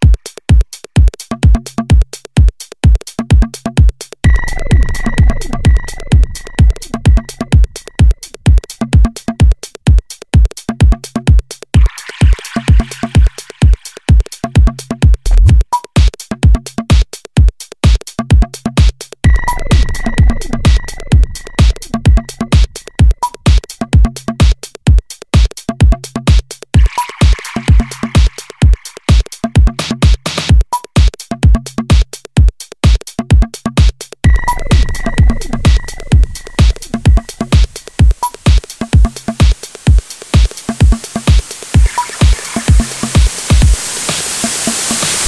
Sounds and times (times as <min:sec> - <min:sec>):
Techno: 0:00.0 - 0:45.2.